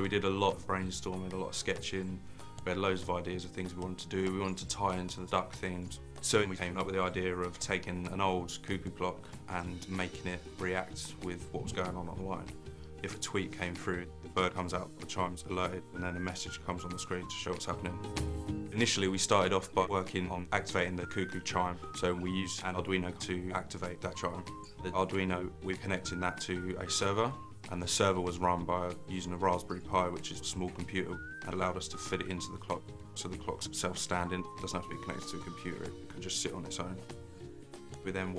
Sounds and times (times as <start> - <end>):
Speech: 0.0 - 18.0, 18.7 - 37.0, 38.0 - 38.3
Music: 0.0 - 38.3.